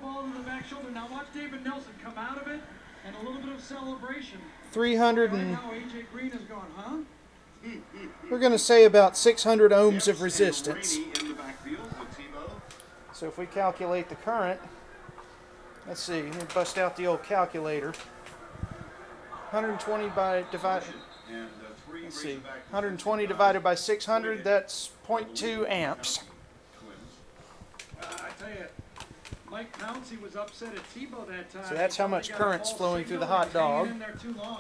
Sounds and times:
Speech: 0.0s - 14.8s, 29.5s - 34.6s.

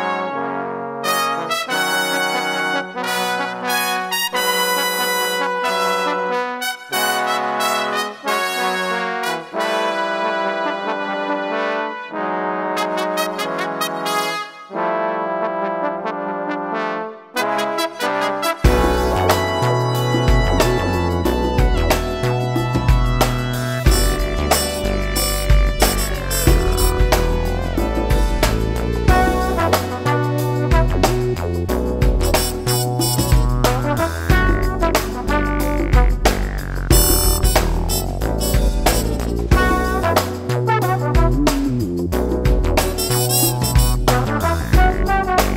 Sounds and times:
Trombone: 0.0s - 45.5s.

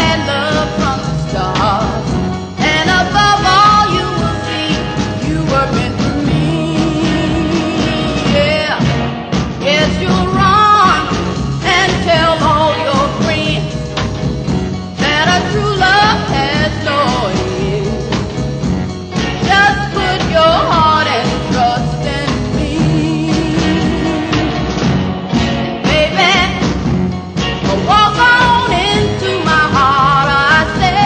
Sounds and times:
Music: 0.0s - 31.0s.

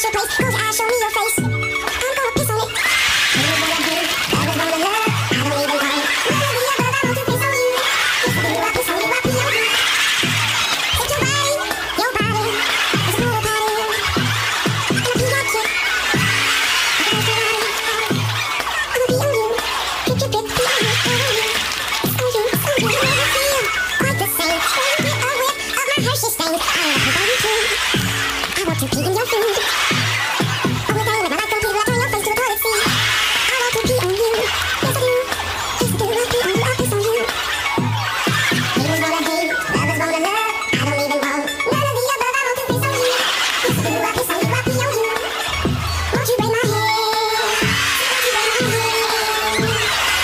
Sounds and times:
Music: 0.0s - 50.2s.

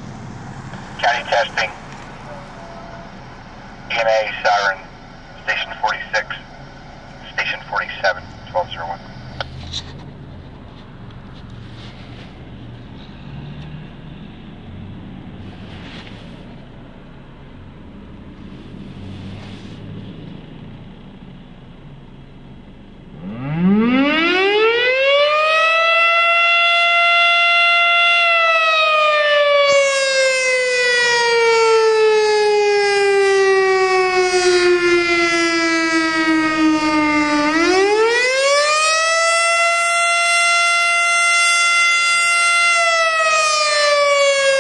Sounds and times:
Civil defense siren: 23.1s - 44.6s.

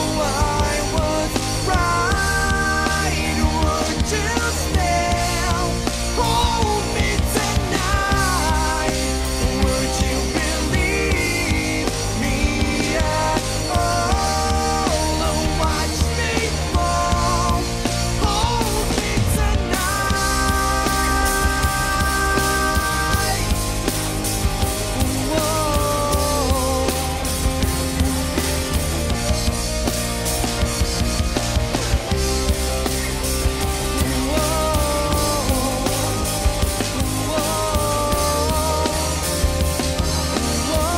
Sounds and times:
Bass drum: 0.0s - 40.9s
Drum kit: 0.0s - 40.9s.

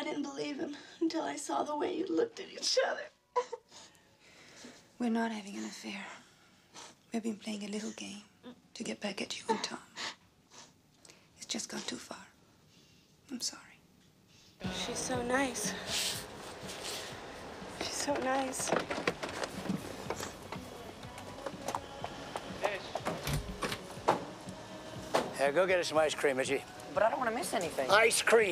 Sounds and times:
Inside, small room: 0.0s - 28.5s.

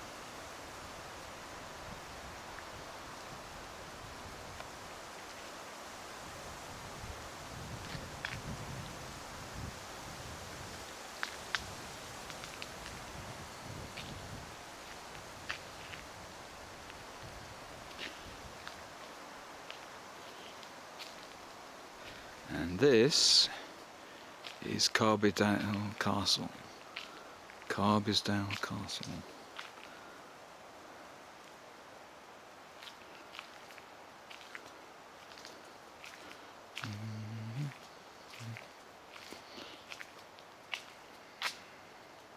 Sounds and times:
Outside, rural or natural: 0.0s - 42.3s.

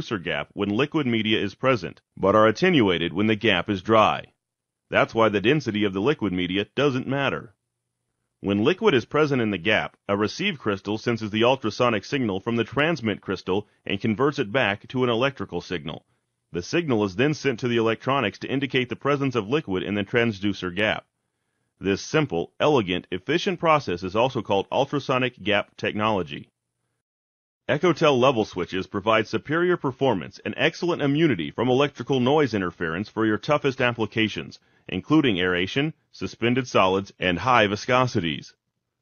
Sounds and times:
Speech synthesizer: 0.0s - 4.3s, 5.0s - 7.5s, 8.5s - 16.0s, 16.6s - 21.0s, 21.8s - 26.4s, 27.7s - 38.5s.

